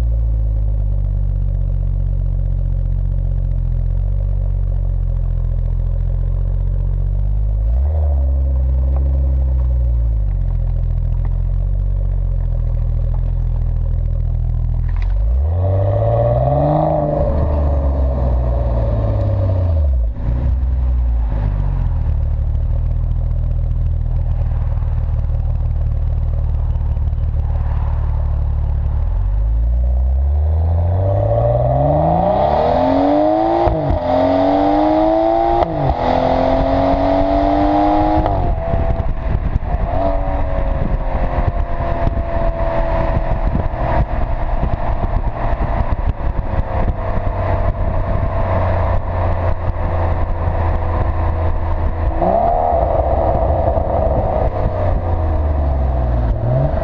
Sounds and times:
Crackle: 8.3s - 16.2s, 20.0s - 30.2s.

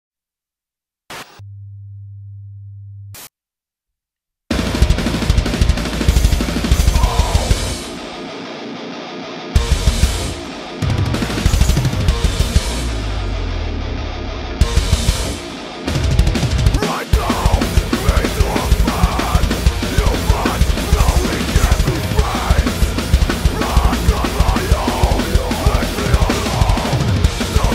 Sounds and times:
Drum: 4.5s - 8.0s, 9.6s - 12.9s, 14.6s - 27.7s
Drum kit: 4.5s - 8.3s, 9.6s - 13.2s, 14.6s - 27.7s.

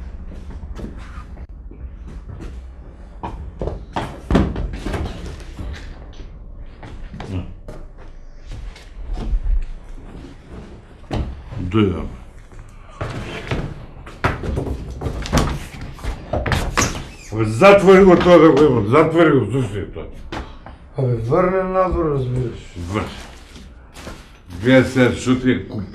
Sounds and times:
Speech: 11.5s - 12.2s, 17.3s - 20.2s, 21.0s - 23.3s, 24.5s - 25.9s.

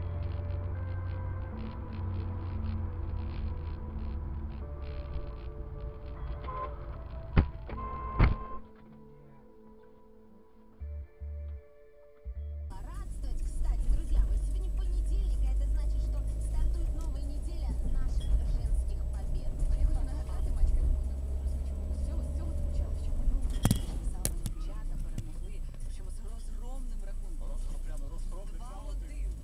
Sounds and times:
Speech: 12.7s - 29.4s.

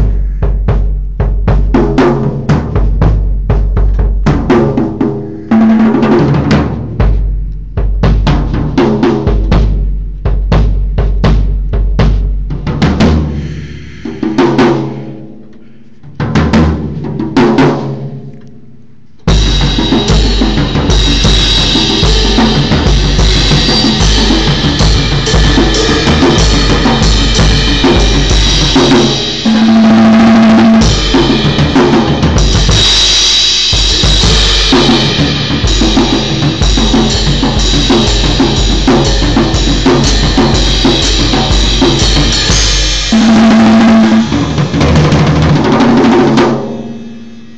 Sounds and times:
Drum kit: 0.0s - 18.2s, 19.3s - 47.5s
Cymbal: 7.0s - 15.8s, 19.3s - 47.5s
Snare drum: 19.4s - 46.9s.

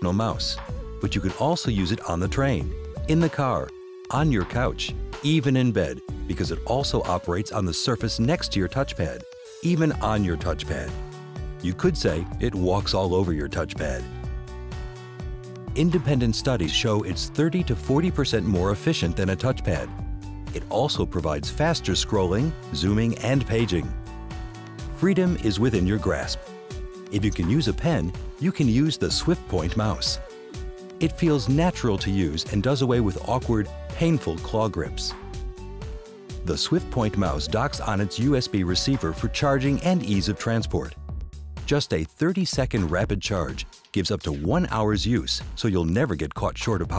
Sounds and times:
Speech: 0.0s - 11.0s, 11.6s - 14.1s, 15.7s - 19.9s, 20.6s - 24.0s, 25.0s - 26.4s, 27.1s - 30.2s, 31.0s - 35.2s, 36.4s - 41.0s, 41.7s - 46.9s
Music: 0.0s - 46.9s.

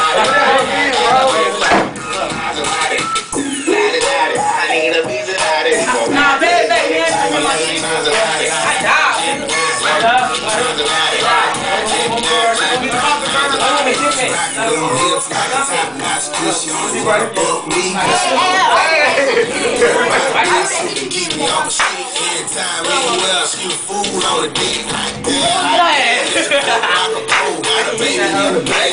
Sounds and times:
Music: 0.0s - 28.9s.

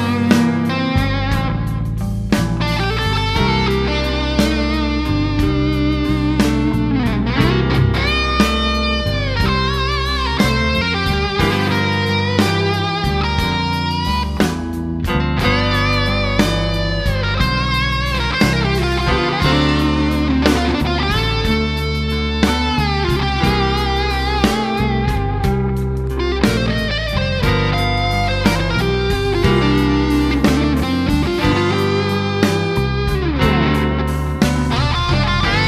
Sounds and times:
Electric guitar: 0.0s - 35.6s
Strum: 0.0s - 35.6s.

